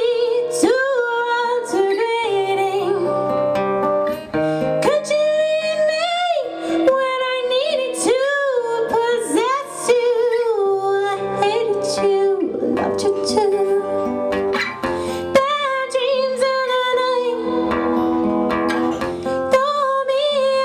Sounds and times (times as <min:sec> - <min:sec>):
Acoustic guitar: 0:00.0 - 0:20.6
Electric guitar: 0:00.0 - 0:20.6
Strum: 0:11.1 - 0:20.6.